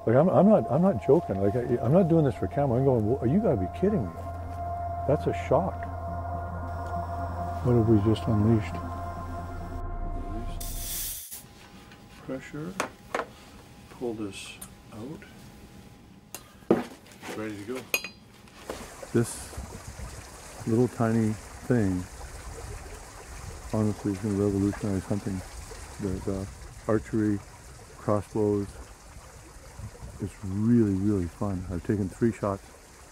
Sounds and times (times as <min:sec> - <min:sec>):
Speech: 0:00.0 - 0:04.2, 0:05.1 - 0:05.8, 0:07.6 - 0:08.9, 0:12.2 - 0:12.8, 0:13.9 - 0:15.3, 0:17.3 - 0:17.9, 0:19.2 - 0:19.5, 0:20.7 - 0:22.1, 0:23.7 - 0:25.4, 0:26.0 - 0:27.4, 0:28.0 - 0:28.8, 0:30.2 - 0:32.6.